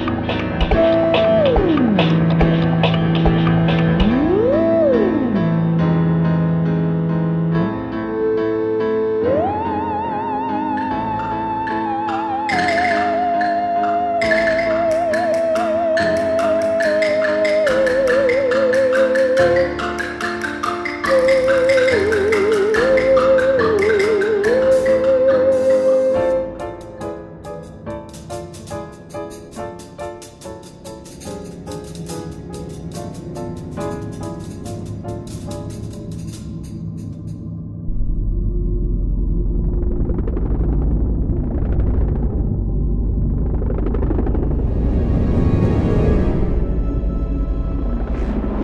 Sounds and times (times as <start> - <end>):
Video game music: 0.0 - 37.6.